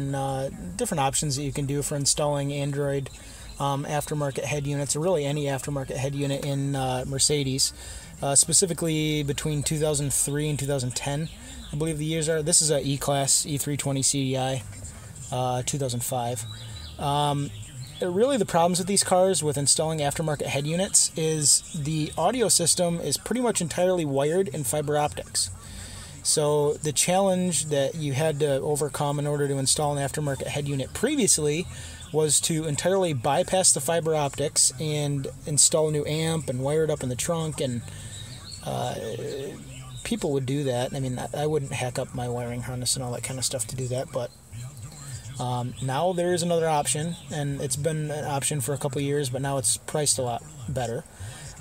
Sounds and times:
Speech: 0.0 - 51.6.

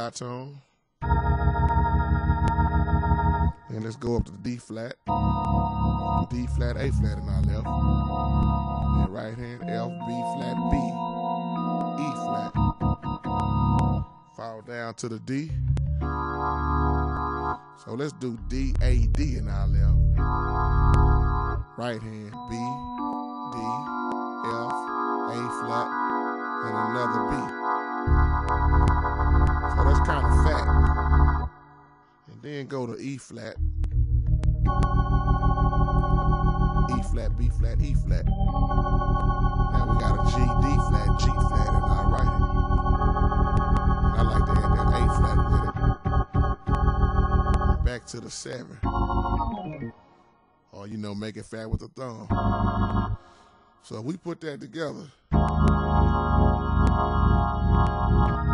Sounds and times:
Speech: 0.0 - 0.7, 3.7 - 5.1, 6.1 - 7.8, 8.9 - 11.0, 12.0 - 12.6, 14.4 - 15.6, 17.8 - 20.1, 21.8 - 22.9, 23.6 - 25.9, 26.6 - 27.5, 29.7 - 30.8, 32.3 - 33.6, 36.9 - 38.4, 39.8 - 42.5, 44.1 - 45.8, 47.8 - 48.9, 50.7 - 52.4, 53.8 - 55.2
Piano: 1.0 - 14.4, 18.9 - 32.0, 33.8 - 48.0, 55.3 - 58.5.

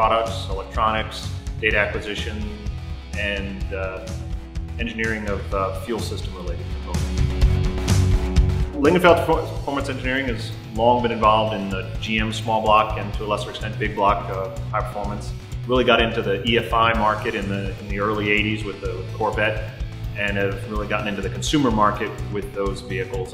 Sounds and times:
Speech: 0.0 - 4.2, 4.8 - 7.0, 8.8 - 23.3
Music: 0.0 - 23.3.

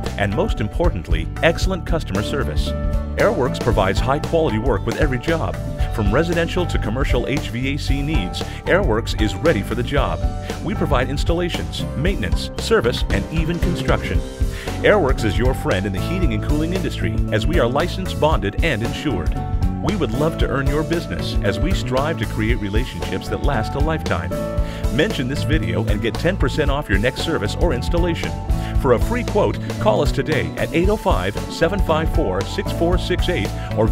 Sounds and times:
Music: 0.0 - 33.9
Speech: 0.0 - 33.9.

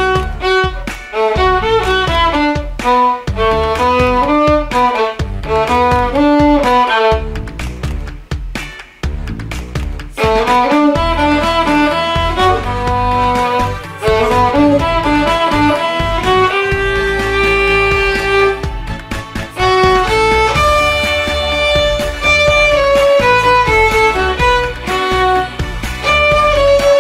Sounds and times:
Violin, fiddle: 0.0 - 7.3, 10.2 - 27.0.

